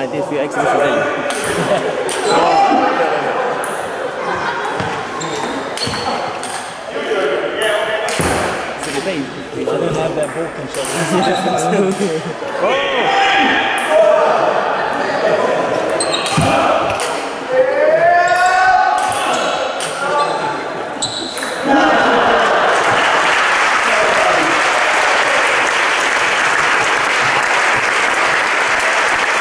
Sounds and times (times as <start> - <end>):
Speech: 0.0 - 1.3, 8.8 - 15.7
Inside, large room or hall: 0.0 - 29.4.